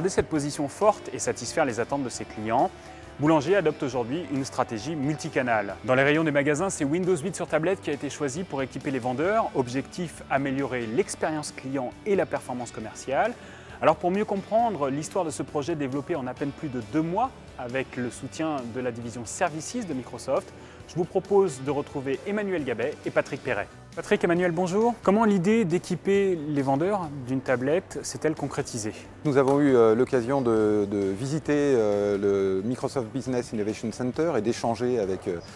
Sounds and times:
Music: 0:00.0 - 0:35.5
Speech: 0:00.0 - 0:35.5.

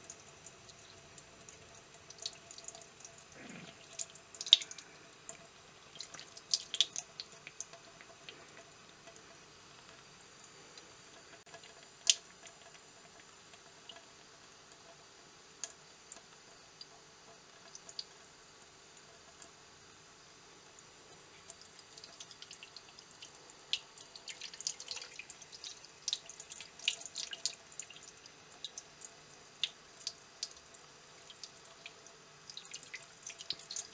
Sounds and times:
Sink (filling or washing): 0:00.0 - 0:19.7, 0:20.6 - 0:33.9
Water: 0:00.0 - 0:33.9
Water tap, faucet: 0:00.0 - 0:33.9.

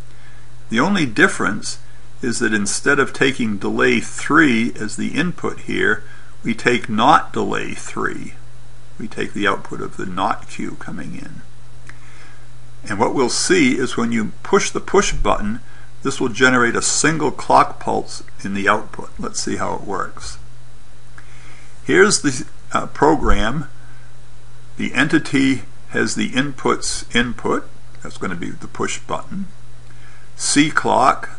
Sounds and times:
Speech: 0:00.7 - 0:08.4, 0:09.0 - 0:11.5, 0:12.8 - 0:20.4, 0:21.8 - 0:23.8, 0:24.8 - 0:29.6, 0:30.4 - 0:31.3.

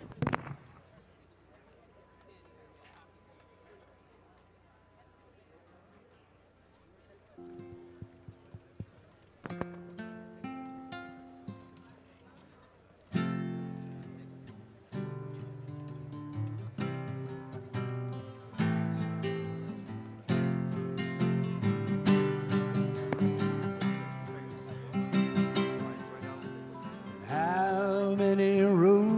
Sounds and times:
Speech: 0:00.0 - 0:09.5, 0:11.3 - 0:16.0, 0:21.5 - 0:29.1
Music: 0:07.4 - 0:12.0, 0:13.1 - 0:29.1.

